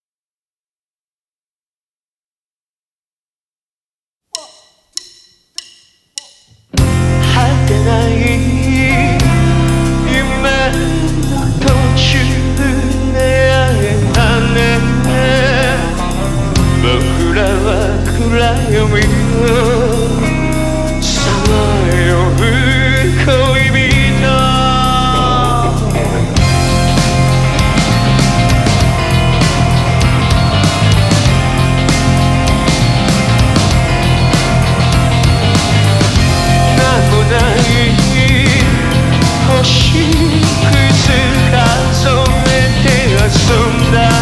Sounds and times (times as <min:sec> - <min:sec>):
Music: 0:04.3 - 0:44.2.